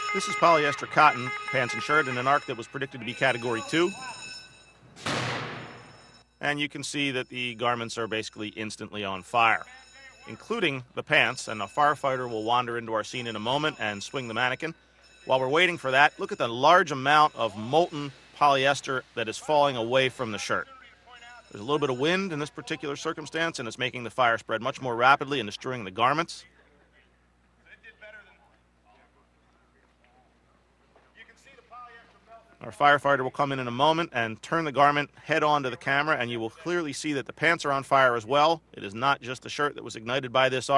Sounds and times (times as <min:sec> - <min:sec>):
Speech: 0:00.2 - 0:04.3, 0:06.4 - 0:30.4, 0:31.2 - 0:40.7.